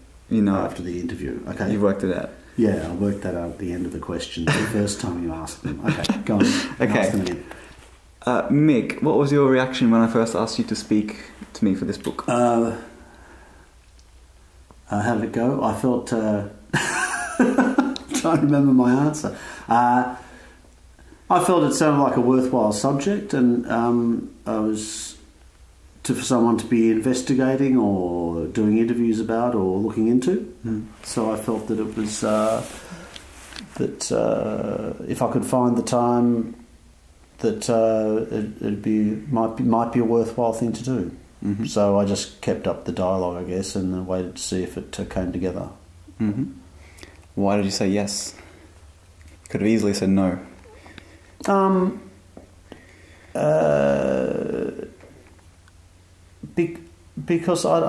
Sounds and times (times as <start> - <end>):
Speech: 0.3 - 7.5, 8.2 - 13.0, 14.9 - 16.6, 18.0 - 20.2, 21.3 - 25.3, 26.0 - 32.9, 33.6 - 36.6, 37.4 - 46.6, 47.4 - 48.5, 49.5 - 50.6, 51.4 - 52.2, 53.4 - 55.0, 56.4 - 57.8.